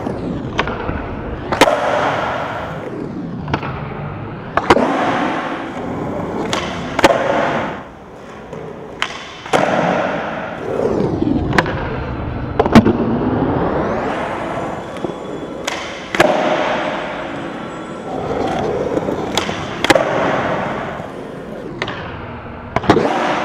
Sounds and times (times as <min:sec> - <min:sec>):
Skateboard: 0:00.0 - 0:23.4.